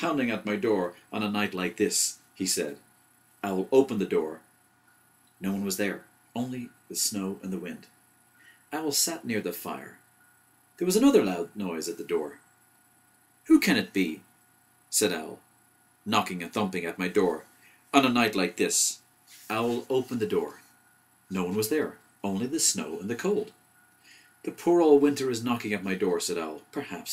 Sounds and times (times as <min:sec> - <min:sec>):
Speech: 0:00.0 - 0:02.8, 0:03.4 - 0:04.4, 0:05.4 - 0:07.9, 0:08.7 - 0:10.0, 0:10.8 - 0:12.4, 0:13.5 - 0:14.2, 0:14.9 - 0:15.4, 0:16.1 - 0:20.6, 0:21.3 - 0:23.5, 0:24.5 - 0:27.1.